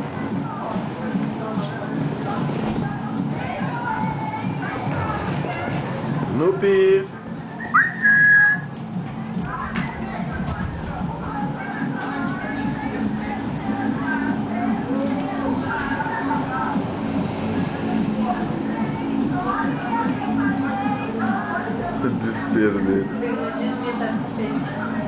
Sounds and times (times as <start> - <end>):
Music: 0.0 - 25.0.